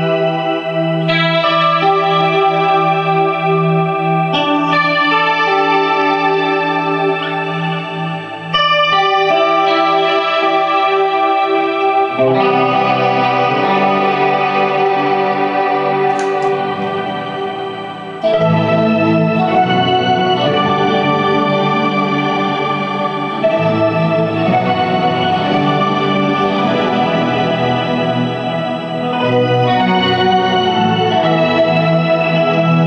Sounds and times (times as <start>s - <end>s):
Music: 0.0s - 32.8s.